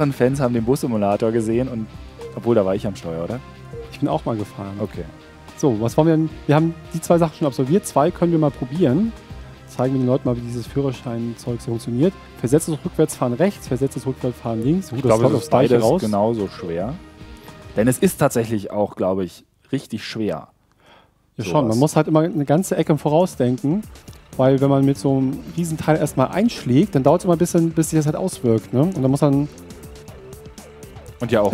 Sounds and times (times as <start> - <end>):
Speech: 0.0 - 9.1, 9.7 - 17.0, 17.8 - 20.6, 21.4 - 29.5, 31.2 - 31.5
Music: 0.0 - 31.5.